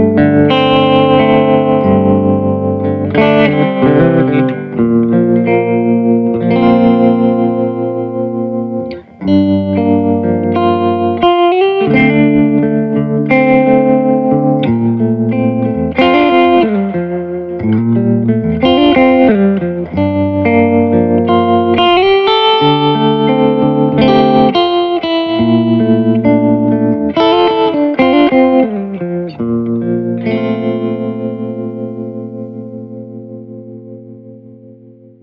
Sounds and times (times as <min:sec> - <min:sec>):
Distortion: 0:00.0 - 0:35.2
Guitar: 0:00.0 - 0:35.2.